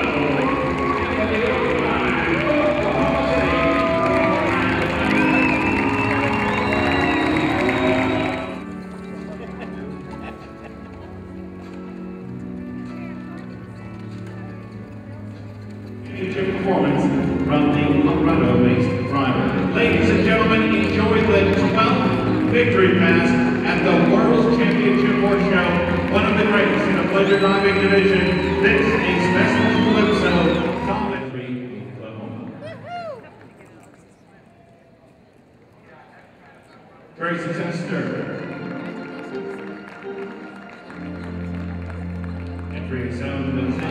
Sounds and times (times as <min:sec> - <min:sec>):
Music: 0:00.0 - 0:33.3, 0:37.2 - 0:43.9.